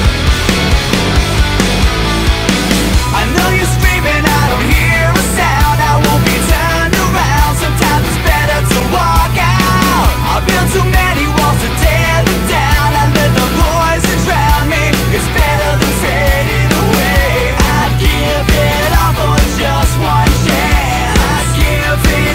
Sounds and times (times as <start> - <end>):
Music: 0.0 - 22.3.